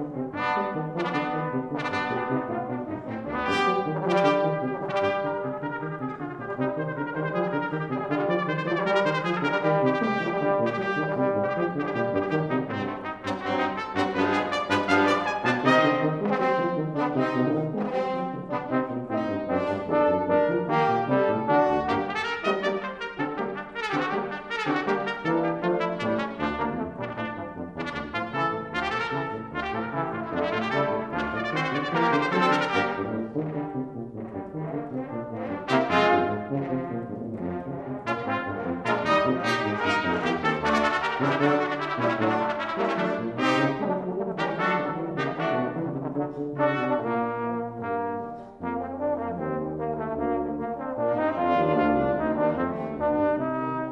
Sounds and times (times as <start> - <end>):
French horn: 0.0 - 53.9.